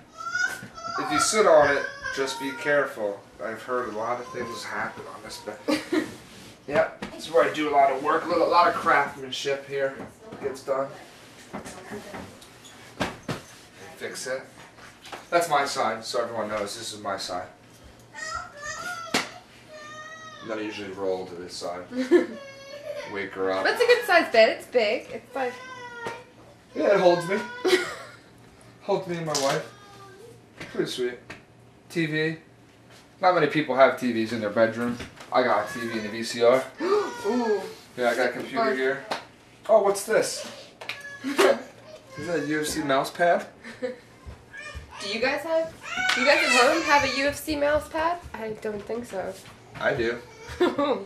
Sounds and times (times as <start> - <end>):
Inside, small room: 0.0 - 51.0.